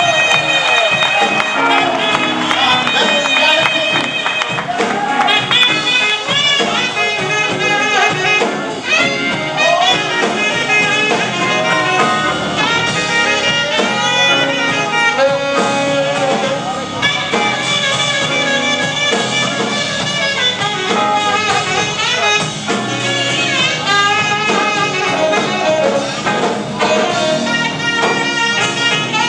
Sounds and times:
Music: 0.0 - 29.2.

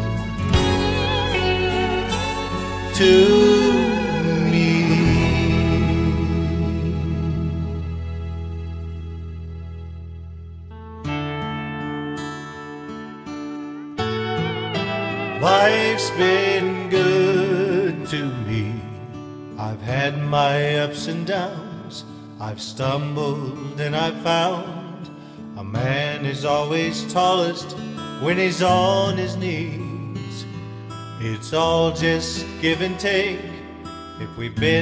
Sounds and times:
Music: 0.0 - 34.8.

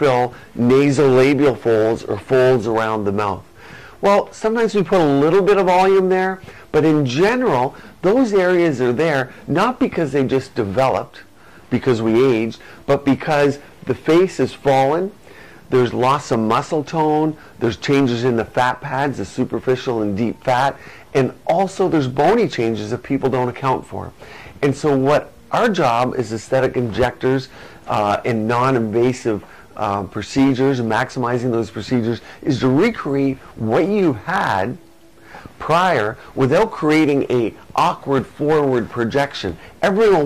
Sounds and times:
Speech: 0.0 - 34.8, 35.6 - 40.2.

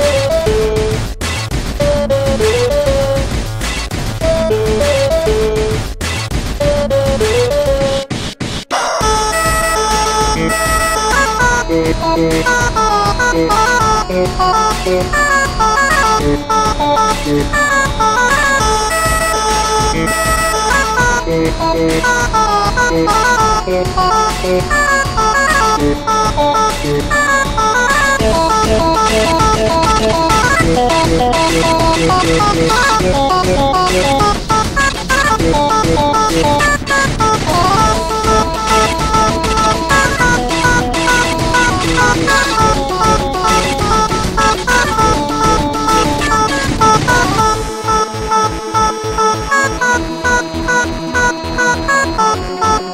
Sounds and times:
Music: 0.0 - 52.9.

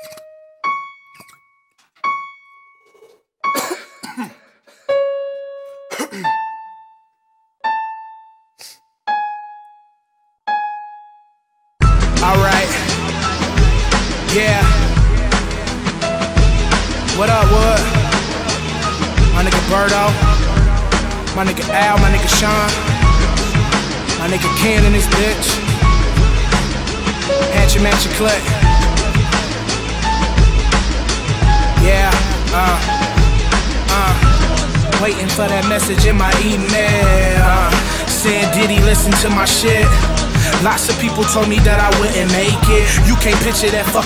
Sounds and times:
Soundtrack music: 11.8 - 44.0.

